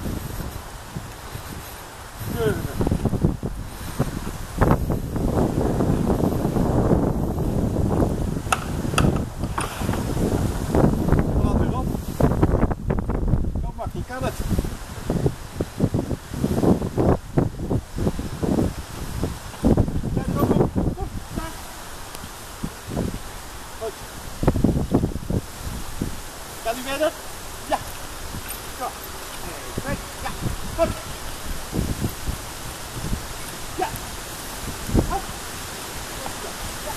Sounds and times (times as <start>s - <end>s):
Outside, rural or natural: 0.0s - 36.9s
Speech: 2.3s - 2.8s, 13.6s - 14.4s, 20.2s - 21.6s, 23.8s - 24.0s, 26.6s - 27.9s, 28.8s - 31.1s, 36.2s - 36.9s.